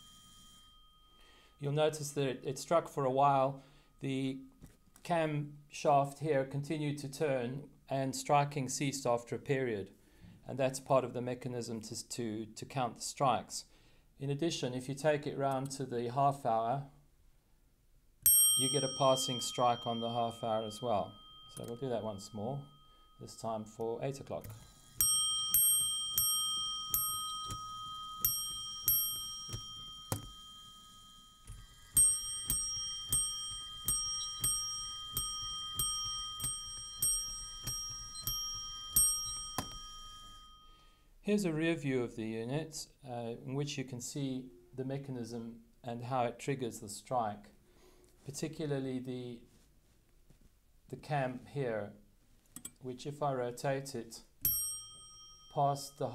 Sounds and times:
Speech: 0:01.6 - 0:17.0, 0:18.6 - 0:24.5, 0:41.2 - 0:47.6, 0:48.3 - 0:49.5, 0:50.9 - 0:52.0, 0:52.8 - 0:54.3, 0:55.6 - 0:56.1.

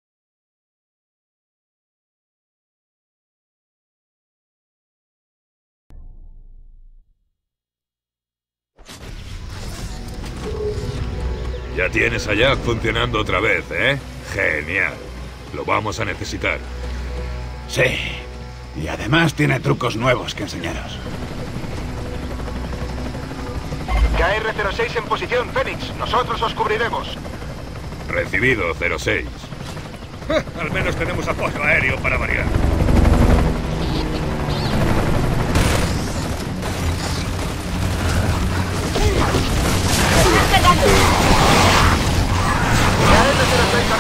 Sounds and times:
Speech: 0:30.3 - 0:32.5
Vehicle: 0:32.4 - 0:40.8.

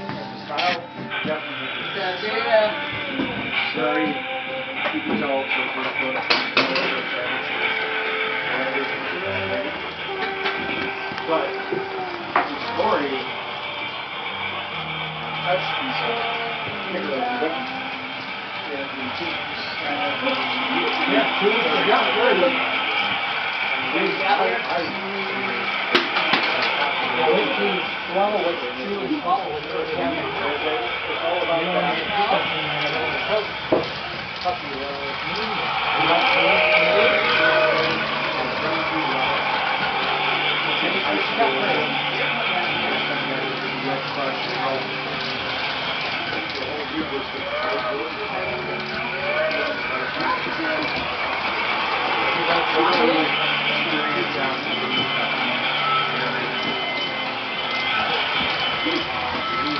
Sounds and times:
Speech: 0:26.5 - 0:33.5, 0:40.6 - 0:45.3, 0:52.2 - 0:59.7.

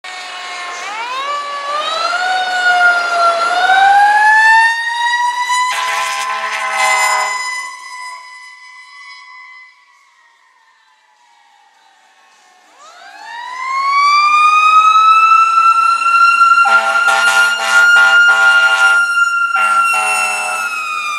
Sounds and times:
Emergency vehicle: 0:00.0 - 0:21.1
Outside, urban or manmade: 0:00.0 - 0:21.1
Engine: 0:00.1 - 0:04.8
Siren: 0:00.1 - 0:21.1
Air horn, truck horn: 0:05.6 - 0:08.5, 0:16.6 - 0:20.8.

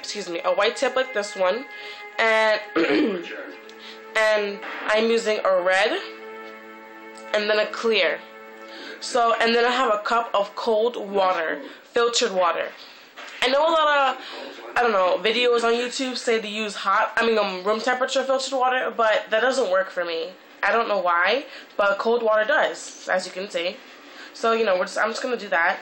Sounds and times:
Speech: 0:00.0 - 0:01.6, 0:04.2 - 0:06.1, 0:09.0 - 0:12.8, 0:13.4 - 0:23.8, 0:24.4 - 0:25.8
Music: 0:00.0 - 0:25.8.

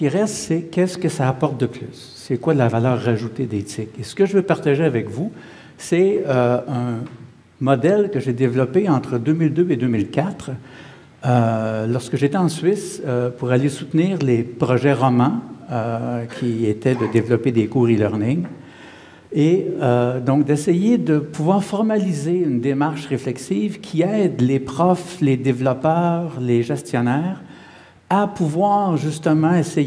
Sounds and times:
Speech: 0:00.0 - 0:10.6, 0:11.2 - 0:18.6, 0:19.3 - 0:27.5, 0:28.1 - 0:29.8.

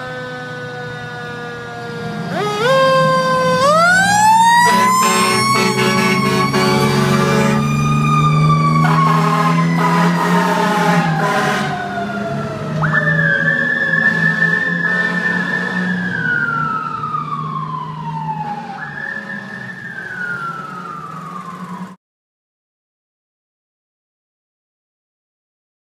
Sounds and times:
Vehicle: 0:00.0 - 0:22.0
Medium engine (mid frequency): 0:19.0 - 0:22.0.

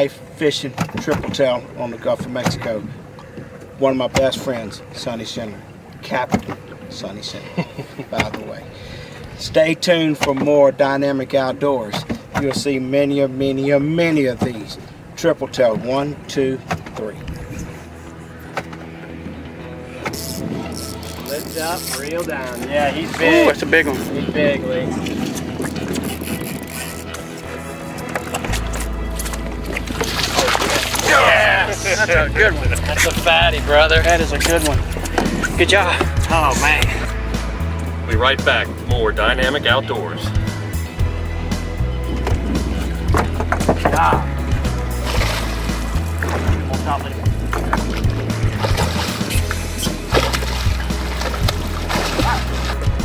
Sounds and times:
Music: 0:17.2 - 0:53.0
Speech: 0:30.4 - 0:34.8, 0:38.1 - 0:40.3.

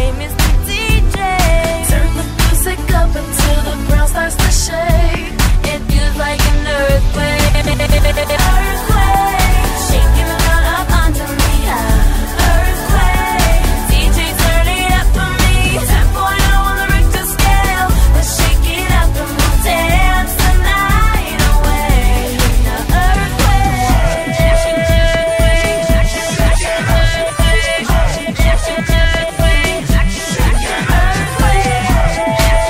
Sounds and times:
Music: 0:00.0 - 0:32.7.

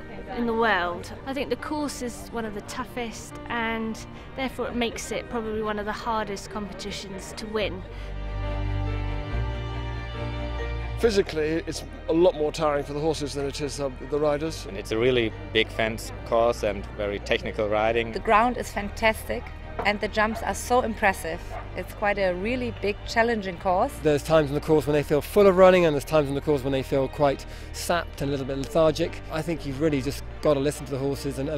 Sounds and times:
Music: 0:00.0 - 0:31.5.

